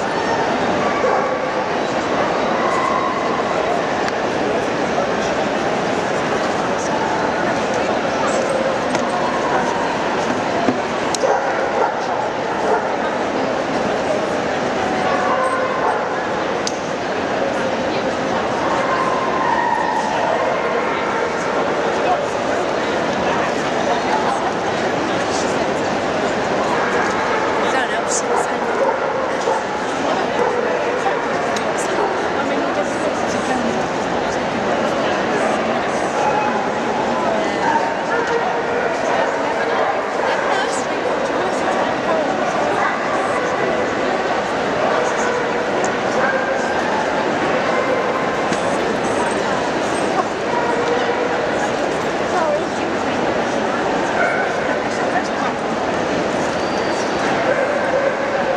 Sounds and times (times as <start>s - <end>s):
Speech: 0.0s - 58.5s.